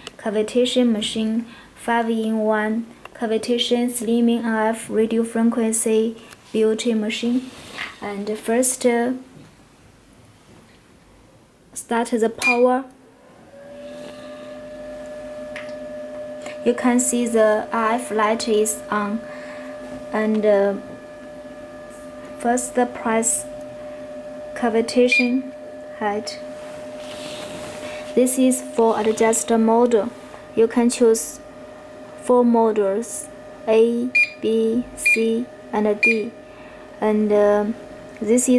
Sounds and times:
Speech: 0.2s - 9.3s, 11.8s - 12.9s, 16.6s - 19.2s, 20.2s - 20.8s, 22.4s - 23.5s, 24.6s - 25.4s, 26.0s - 26.4s, 28.2s - 31.4s, 32.3s - 36.4s, 37.0s - 38.5s.

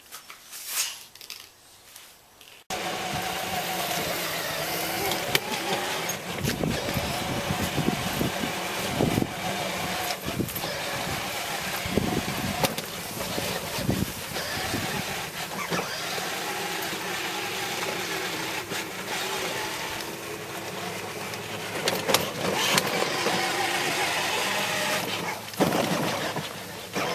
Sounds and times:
Car: 2.7s - 27.1s.

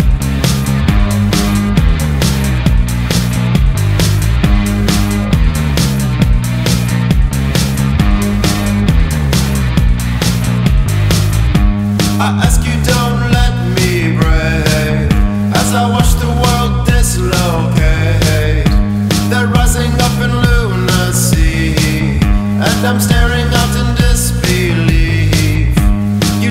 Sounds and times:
Music: 0.0s - 26.5s.

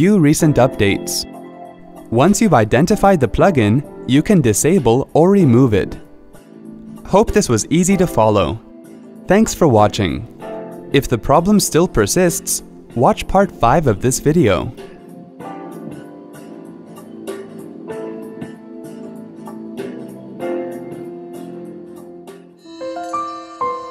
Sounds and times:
Speech: 0.0s - 1.3s, 2.1s - 6.0s, 7.1s - 8.6s, 9.3s - 10.3s, 11.0s - 14.8s
Music: 0.0s - 23.9s.

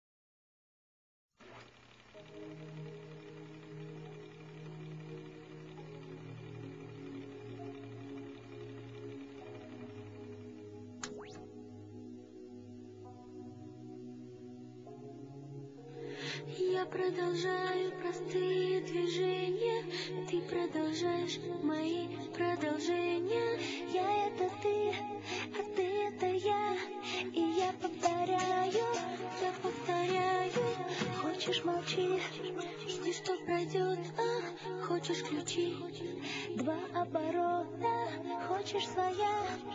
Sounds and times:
Music: 1.4s - 39.7s.

